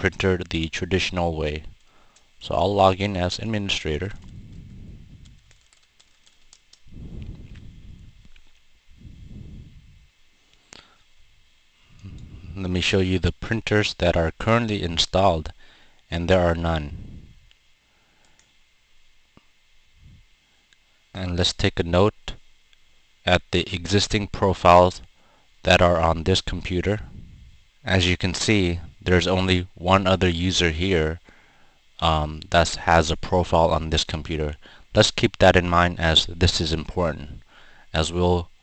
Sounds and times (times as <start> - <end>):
Speech: 0.0 - 1.7, 2.4 - 4.2, 12.5 - 17.0, 21.2 - 22.4, 23.2 - 27.1, 27.8 - 31.2, 32.0 - 38.5.